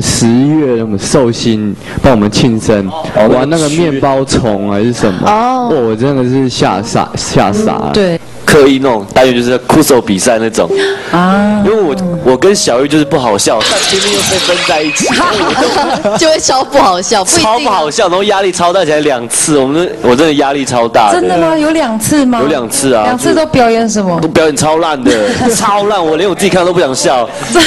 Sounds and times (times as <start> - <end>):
Music: 10.7 - 13.7.